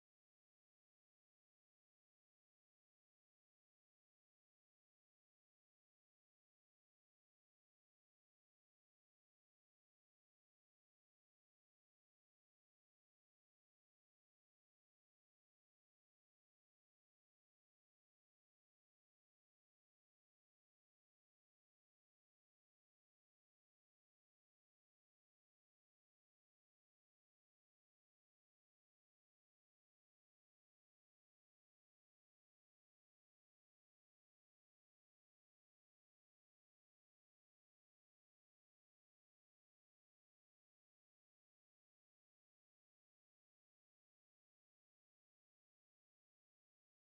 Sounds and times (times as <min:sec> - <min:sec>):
Music: 0:00.0 - 0:47.1.